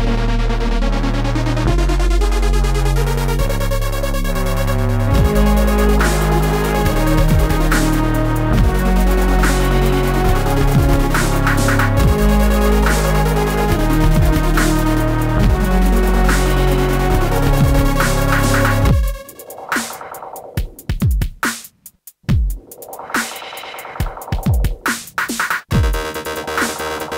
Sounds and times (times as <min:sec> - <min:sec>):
Synthesizer: 0:00.0 - 0:20.9, 0:22.4 - 0:27.1
Dubstep: 0:00.2 - 0:27.1.